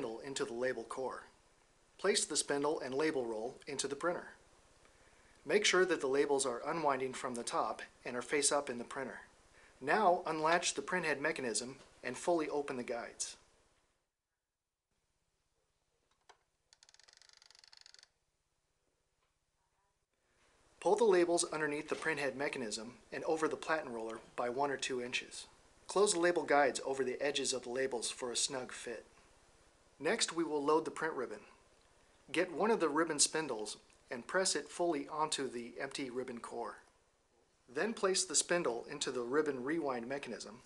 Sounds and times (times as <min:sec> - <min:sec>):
Speech: 0:00.0 - 0:01.4, 0:02.0 - 0:04.4, 0:05.5 - 0:13.4, 0:20.8 - 0:29.1, 0:30.0 - 0:31.6, 0:32.3 - 0:36.9, 0:37.7 - 0:40.6.